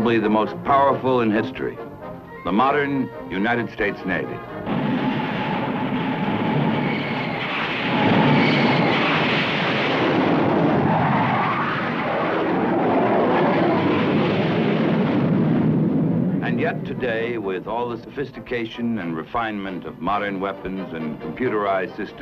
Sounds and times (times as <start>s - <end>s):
Speech: 0.0s - 1.8s, 2.4s - 4.4s, 16.4s - 22.2s.